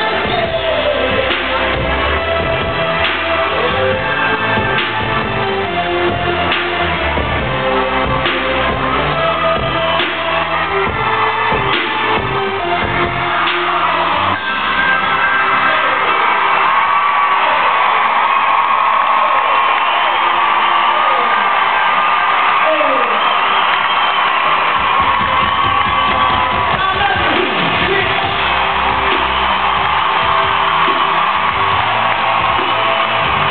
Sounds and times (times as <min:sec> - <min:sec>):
Music: 0:00.0 - 0:33.5.